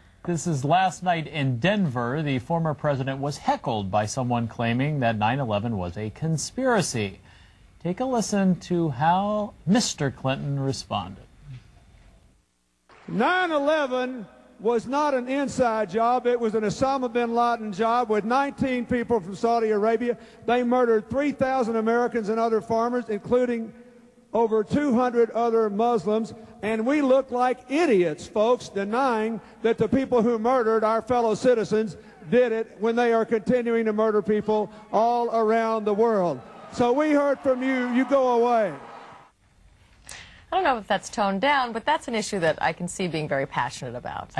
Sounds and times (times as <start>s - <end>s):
Speech: 0.3s - 7.2s, 7.8s - 11.2s, 13.1s - 23.7s, 24.4s - 38.8s.